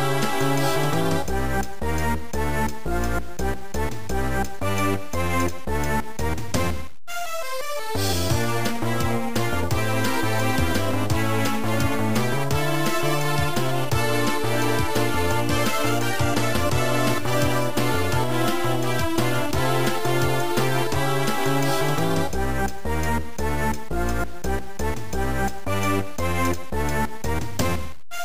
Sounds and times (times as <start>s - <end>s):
Video game music: 0.0s - 28.2s.